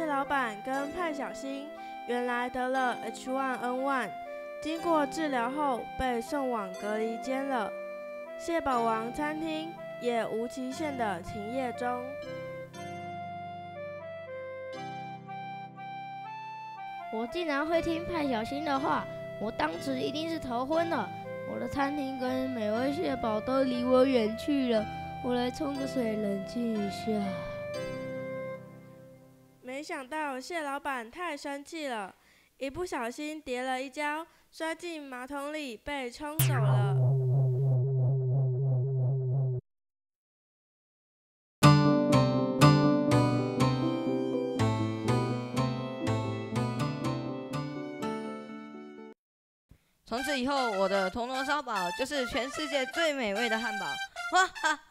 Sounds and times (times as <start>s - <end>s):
Speech: 0.0s - 7.7s, 8.4s - 12.1s, 17.1s - 27.5s, 29.6s - 37.0s, 50.1s - 54.0s
Music: 0.0s - 29.6s, 41.6s - 49.2s, 50.1s - 54.6s.